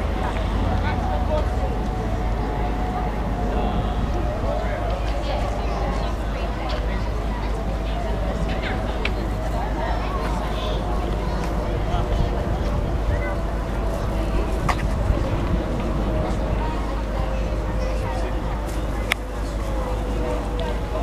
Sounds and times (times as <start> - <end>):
Speech: 0.0 - 21.0.